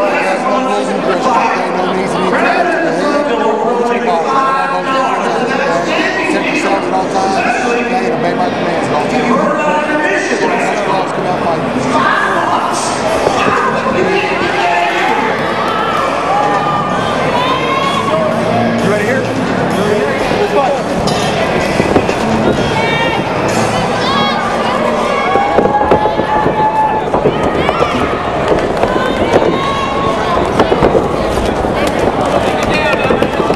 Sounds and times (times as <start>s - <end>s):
Speech: 0.0s - 15.4s
Cheering: 12.0s - 18.6s, 22.5s - 33.5s.